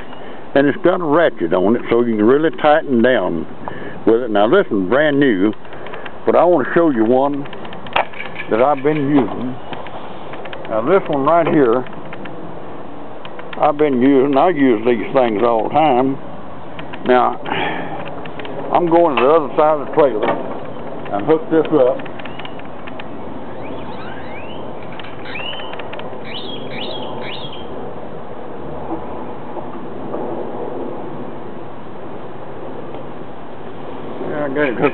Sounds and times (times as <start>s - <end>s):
Speech: 0.6s - 5.6s, 6.3s - 7.5s, 8.5s - 9.6s, 10.7s - 11.9s, 13.6s - 16.2s, 17.0s - 17.4s, 18.7s - 20.3s, 21.1s - 22.0s, 34.2s - 34.9s.